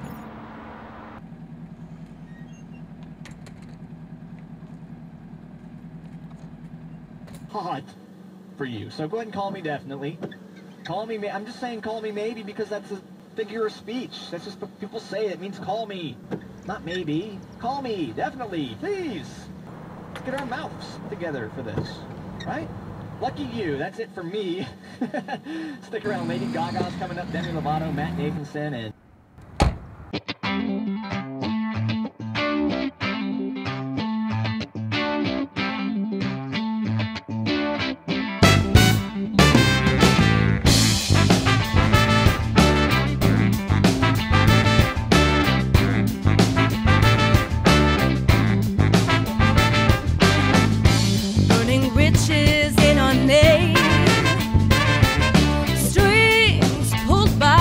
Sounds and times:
Speech: 7.5s - 8.0s, 8.6s - 19.5s, 20.2s - 24.8s, 25.8s - 29.0s, 51.5s - 54.1s, 55.8s - 57.6s.

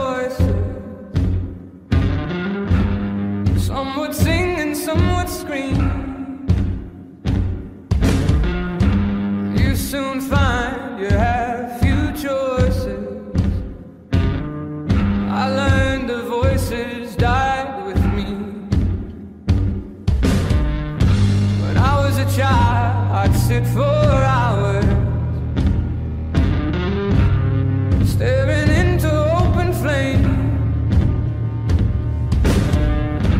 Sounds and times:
Music: 0.0s - 33.3s.

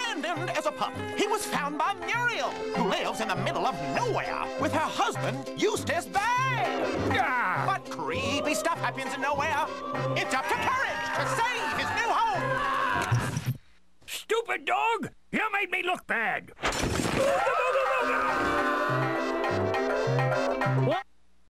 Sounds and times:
Music: 0.0s - 12.8s, 17.8s - 21.0s
Speech: 14.1s - 16.5s.

